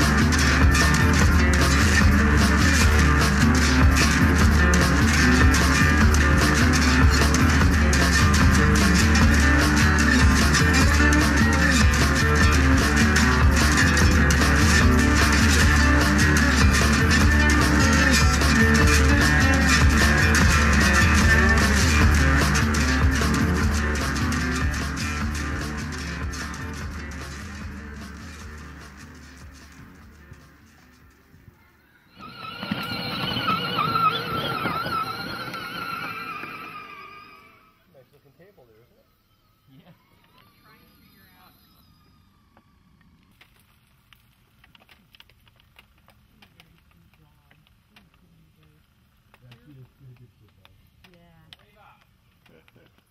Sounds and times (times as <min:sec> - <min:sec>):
Music: 0:00.0 - 0:37.9.